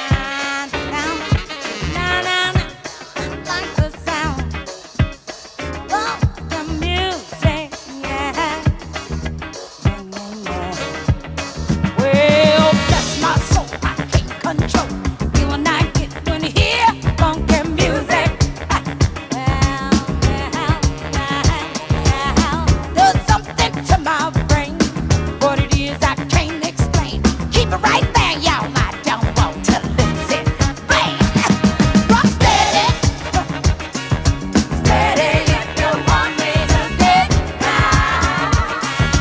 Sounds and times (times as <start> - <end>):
Music: 0.0 - 39.2.